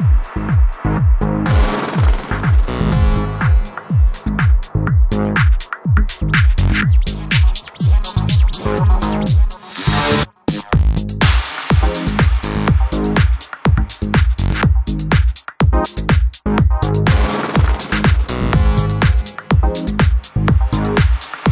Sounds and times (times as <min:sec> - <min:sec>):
Music: 0:00.0 - 0:21.5
Sound effect: 0:01.4 - 0:04.3, 0:06.4 - 0:13.2.